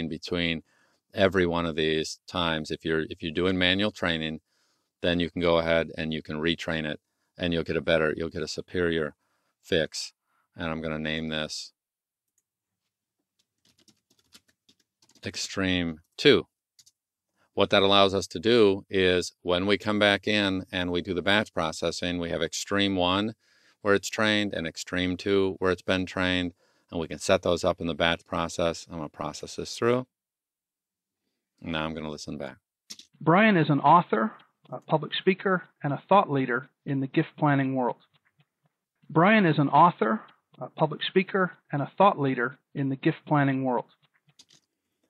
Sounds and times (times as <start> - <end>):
Computer keyboard: 13.4 - 15.3, 16.8 - 17.0.